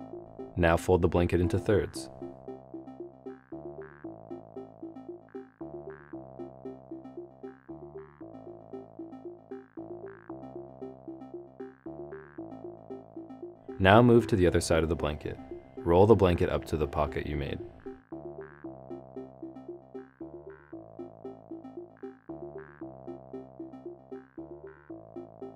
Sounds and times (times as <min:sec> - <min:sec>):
Music: 0:00.0 - 0:25.5
Speech: 0:00.6 - 0:02.1, 0:13.8 - 0:17.6.